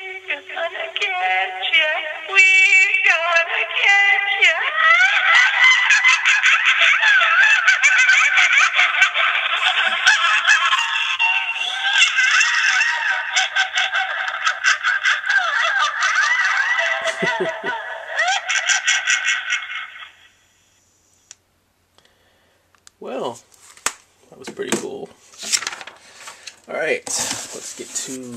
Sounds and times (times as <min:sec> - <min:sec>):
Inside, small room: 0:00.0 - 0:28.3.